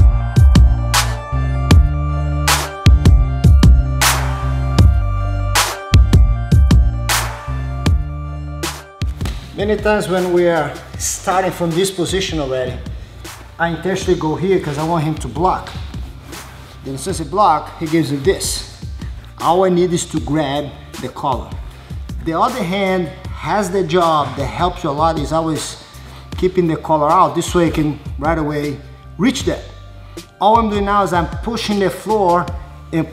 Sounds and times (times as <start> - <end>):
Music: 0.0 - 33.1
Speech: 9.5 - 12.9, 13.6 - 15.7, 16.8 - 18.7, 19.4 - 21.6, 22.2 - 25.8, 26.4 - 29.7, 30.4 - 33.1.